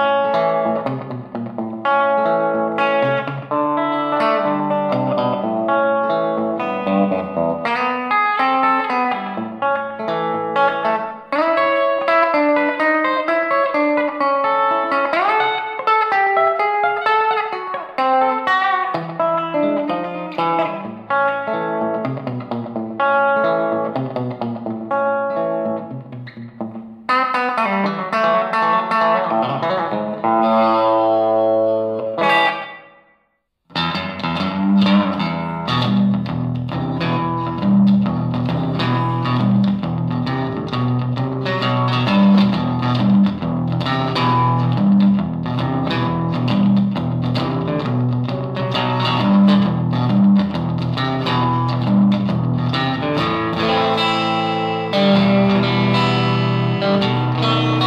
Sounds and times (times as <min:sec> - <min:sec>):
Electric guitar: 0:00.0 - 0:33.1, 0:33.7 - 0:57.8.